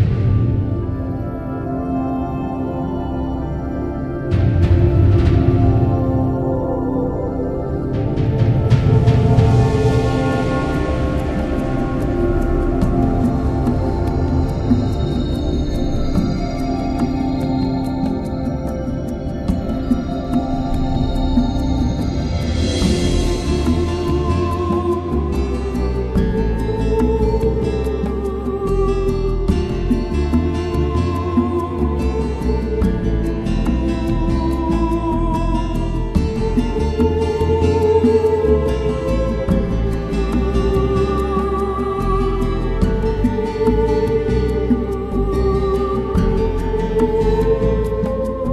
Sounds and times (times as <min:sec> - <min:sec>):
Music: 0:00.0 - 0:48.5.